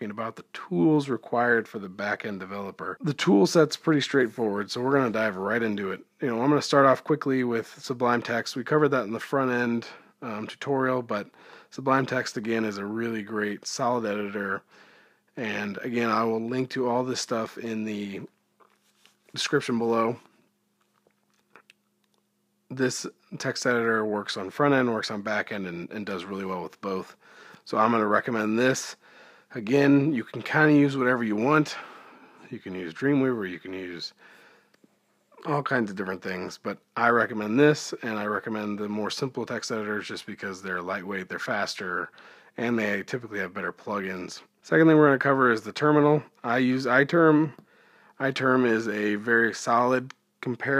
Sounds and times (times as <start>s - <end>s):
Speech: 0.0s - 14.7s, 15.4s - 18.3s, 19.3s - 20.3s, 22.7s - 34.2s, 35.4s - 47.6s, 48.2s - 50.7s.